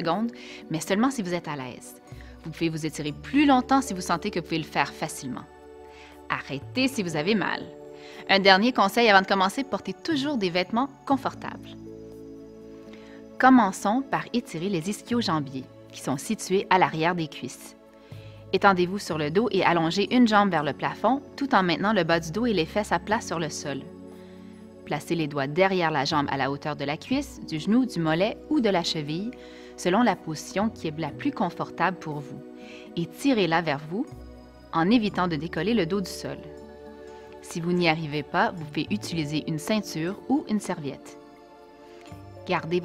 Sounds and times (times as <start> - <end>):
Speech: 0.0 - 5.5, 6.3 - 7.7, 8.3 - 11.8, 13.4 - 17.7, 18.6 - 23.9, 24.9 - 32.4, 33.0 - 34.1, 34.8 - 36.5, 37.4 - 41.1, 42.5 - 42.8
Music: 0.0 - 42.8.